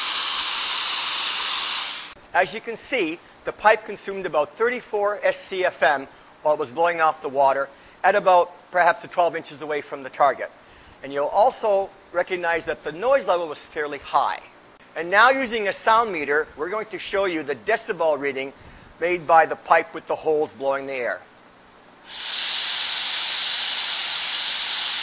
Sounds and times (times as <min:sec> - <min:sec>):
Hiss: 0:00.0 - 0:02.2, 0:22.0 - 0:25.0.